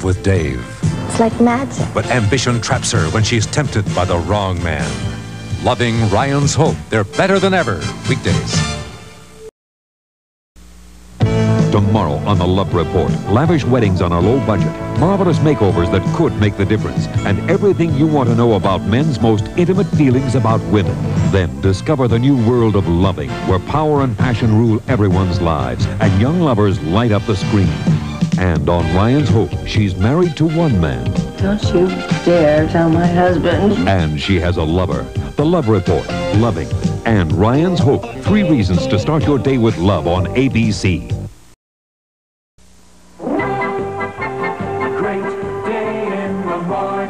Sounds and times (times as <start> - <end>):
Speech: 0.0 - 5.0, 5.6 - 8.7, 11.7 - 41.2
Music: 0.0 - 9.5, 11.2 - 41.5, 43.2 - 47.1.